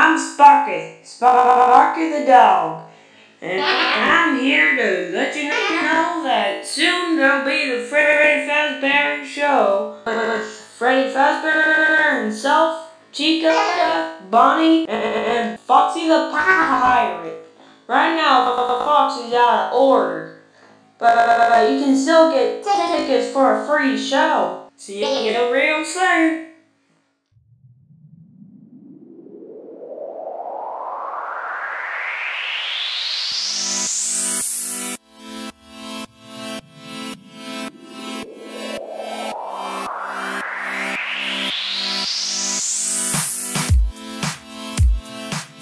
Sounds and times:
Speech: 0:00.0 - 0:20.4, 0:21.0 - 0:26.5.

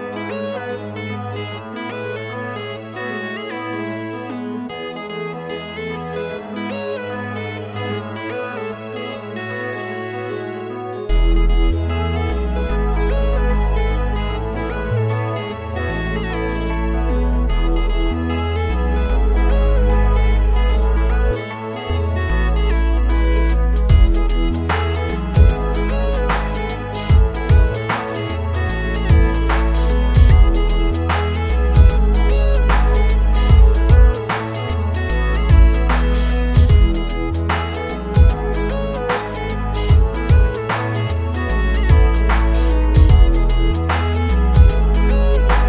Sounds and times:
Music: 0:00.0 - 0:45.6.

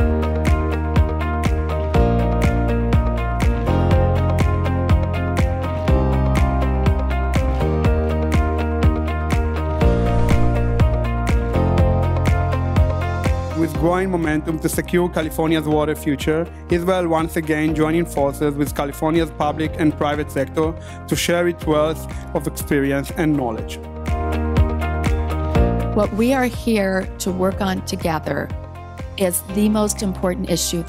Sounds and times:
Music: 0:00.0 - 0:30.8
Speech: 0:13.6 - 0:23.8, 0:26.0 - 0:28.5, 0:29.2 - 0:30.8.

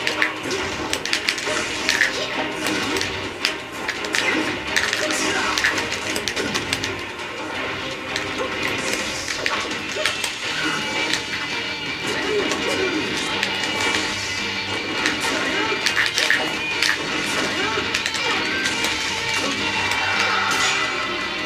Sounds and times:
Music: 0:00.0 - 0:21.4.

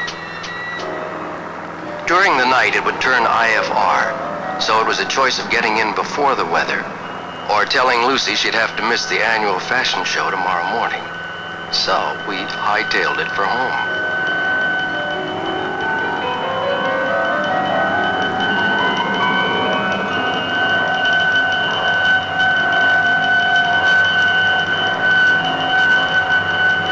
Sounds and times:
Glockenspiel: 0:00.0 - 0:26.9
Marimba, xylophone: 0:08.8 - 0:26.9.

